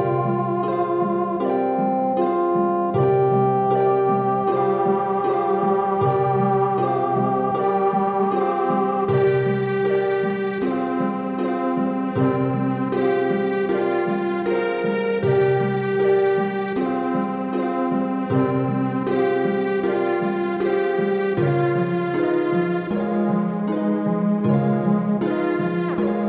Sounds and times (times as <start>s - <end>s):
Theme music: 0.0s - 26.2s.